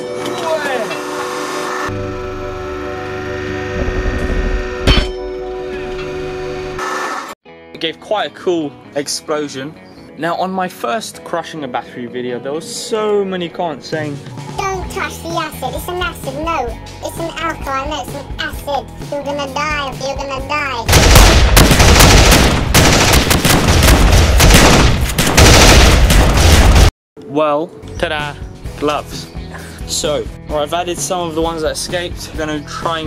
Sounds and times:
Music: 0.0s - 6.8s, 7.5s - 20.9s, 27.2s - 33.0s
Speech: 7.8s - 14.2s, 29.9s - 33.0s.

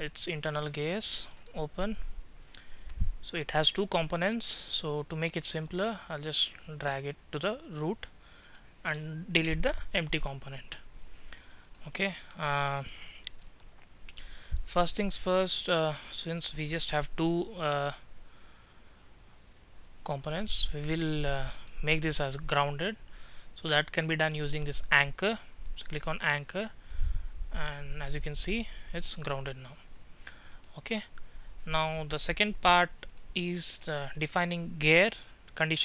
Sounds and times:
Speech: 0.0s - 2.1s, 3.2s - 8.1s, 8.8s - 10.9s, 11.8s - 13.2s, 14.7s - 18.0s, 20.0s - 23.0s, 23.6s - 26.8s, 27.6s - 29.9s, 30.7s - 35.8s.

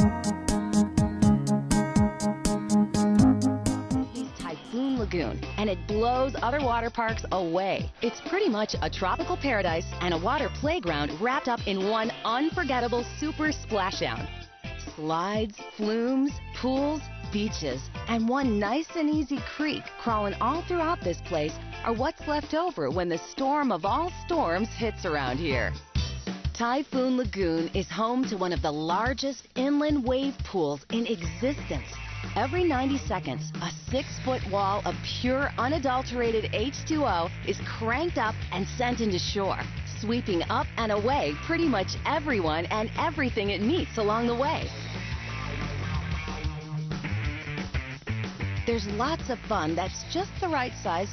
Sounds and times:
Music: 0.0s - 51.1s
Speech: 4.4s - 25.8s, 26.6s - 44.8s, 48.7s - 51.1s.

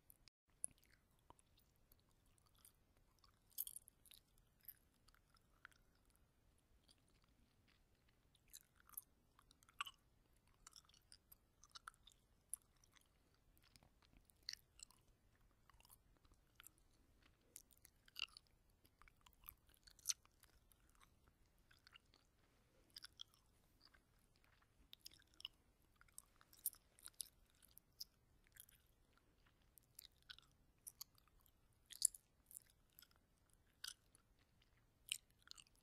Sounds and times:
Chewing, mastication: 0.0s - 35.8s.

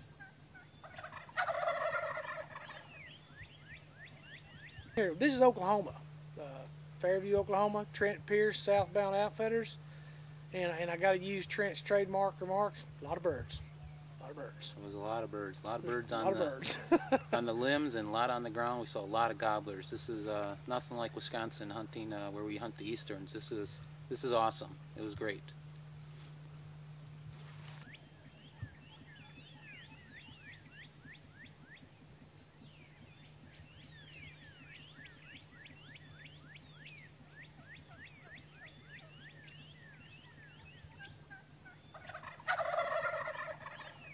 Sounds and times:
Speech: 5.0s - 9.8s, 10.6s - 16.7s, 17.3s - 25.6s.

